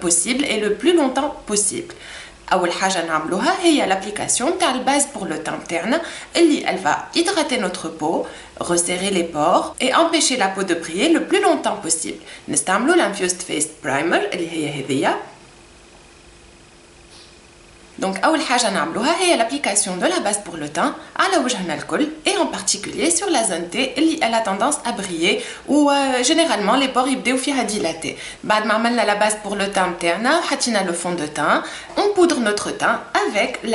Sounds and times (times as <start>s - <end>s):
Speech: 0.0s - 15.4s, 18.0s - 33.7s.